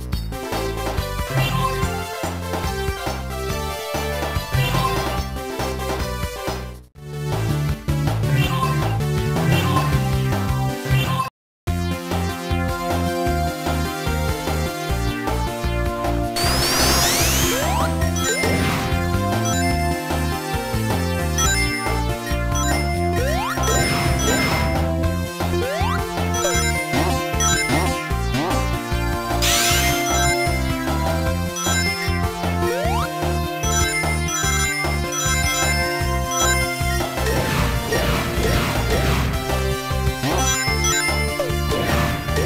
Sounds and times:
Music: 0.0s - 42.4s.

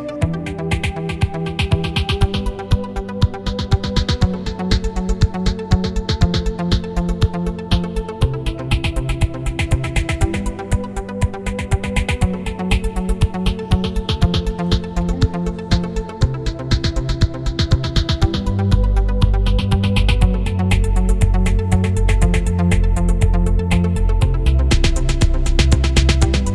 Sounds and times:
Music: 0.0s - 26.5s.

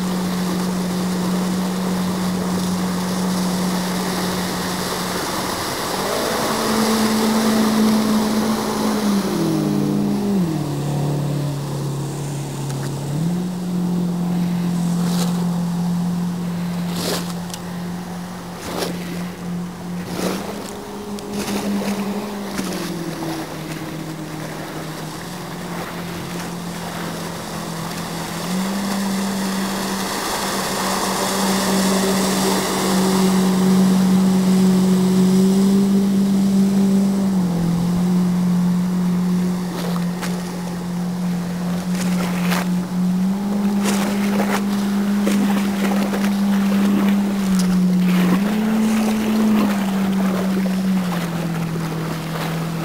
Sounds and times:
Motorboat, speedboat: 0.0s - 52.8s.

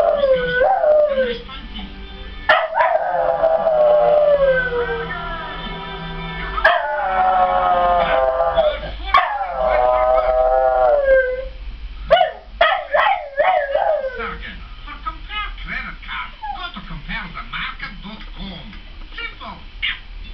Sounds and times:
Howl: 0.0s - 1.4s, 2.5s - 5.5s, 6.6s - 11.6s, 13.0s - 14.3s
Speech: 14.1s - 20.3s.

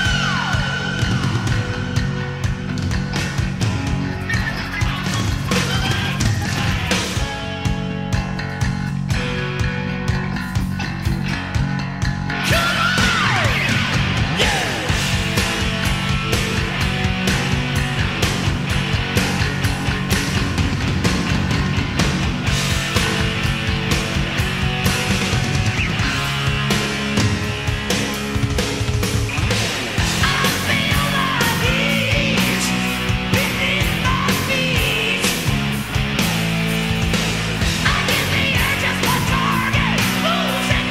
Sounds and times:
Rock and roll: 0.0s - 40.9s.

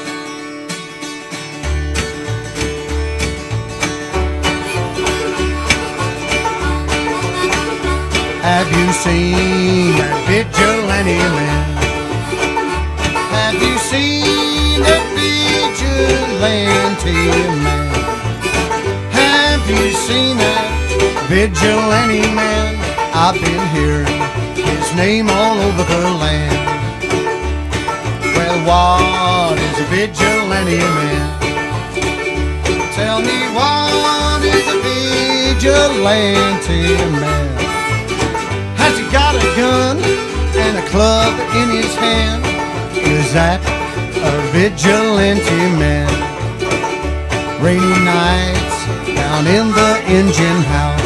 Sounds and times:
Music: 0.0s - 51.0s.

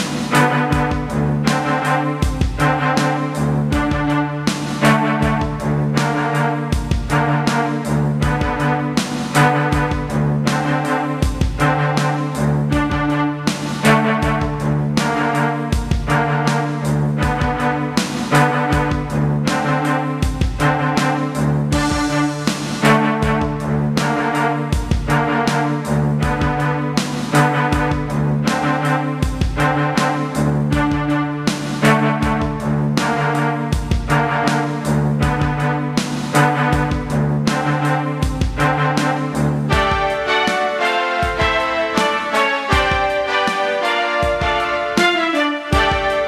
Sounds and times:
Music: 0.0s - 46.2s.

